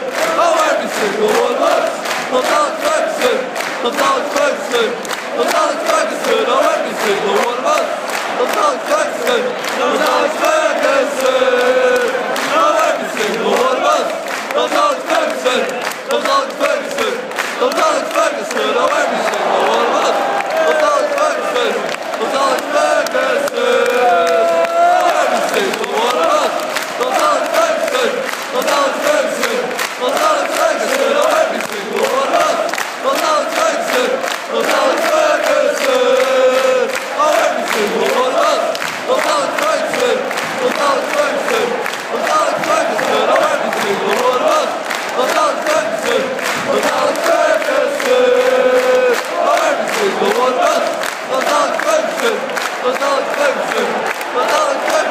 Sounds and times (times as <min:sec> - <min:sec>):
Male singing: 0:00.0 - 0:55.1.